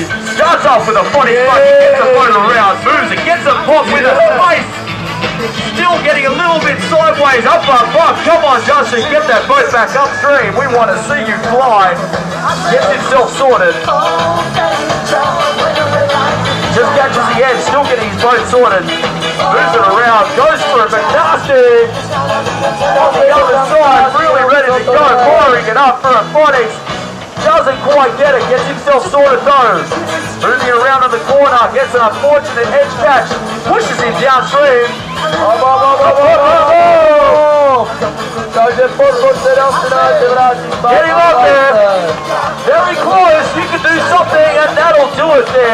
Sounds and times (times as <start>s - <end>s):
Speech: 0.0s - 4.7s, 5.6s - 13.9s, 16.7s - 21.9s, 23.0s - 26.8s, 27.4s - 37.9s, 38.5s - 45.7s
Music: 0.0s - 45.7s.